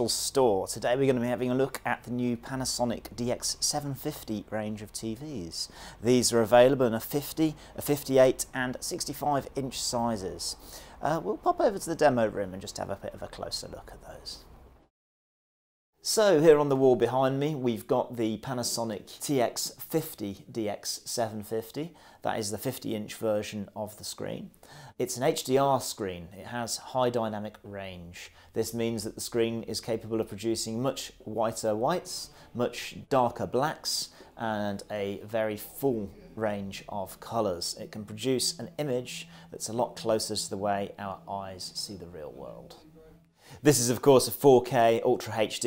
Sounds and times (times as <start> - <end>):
Speech: 0.0 - 14.5, 16.0 - 45.6.